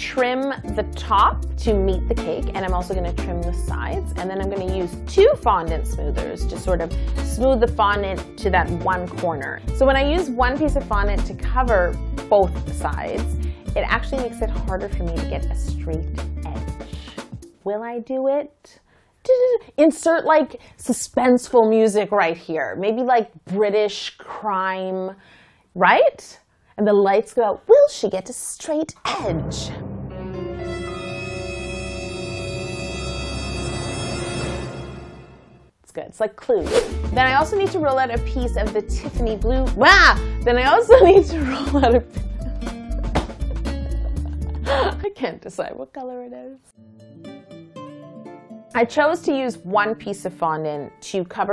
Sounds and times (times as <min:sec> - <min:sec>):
Speech: 0:00.0 - 0:16.6, 0:17.6 - 0:25.2, 0:25.8 - 0:29.8, 0:35.9 - 0:42.0, 0:44.7 - 0:46.7, 0:48.8 - 0:51.5
Music: 0:00.0 - 0:17.8, 0:29.1 - 0:35.8, 0:36.5 - 0:51.5.